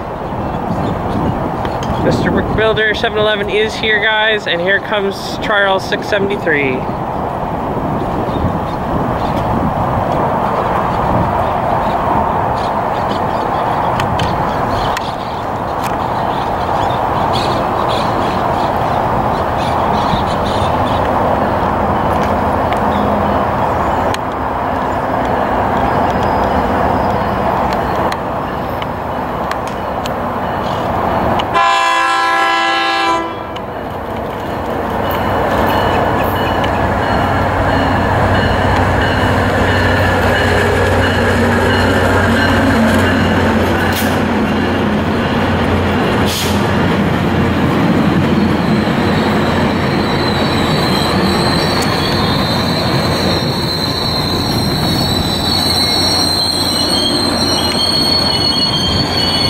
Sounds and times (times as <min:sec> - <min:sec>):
Railroad car, train wagon: 0:00.0 - 0:59.5.